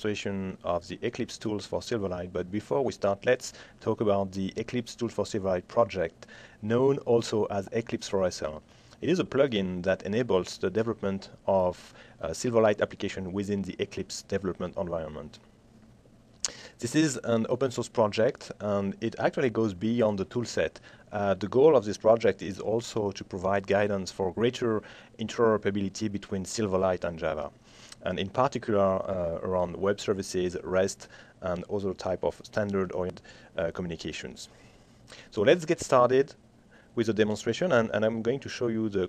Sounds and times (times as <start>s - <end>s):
Speech: 0.0s - 15.4s, 16.8s - 34.5s, 35.3s - 36.4s, 37.0s - 39.0s.